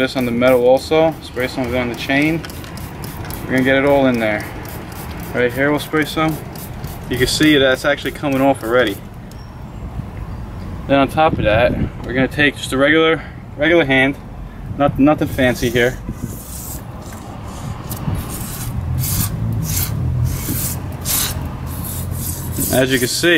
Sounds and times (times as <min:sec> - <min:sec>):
Speech: 0:00.0 - 0:02.4, 0:03.5 - 0:04.5, 0:05.3 - 0:06.4, 0:07.1 - 0:09.0, 0:10.9 - 0:14.2, 0:14.8 - 0:16.0, 0:22.7 - 0:23.3.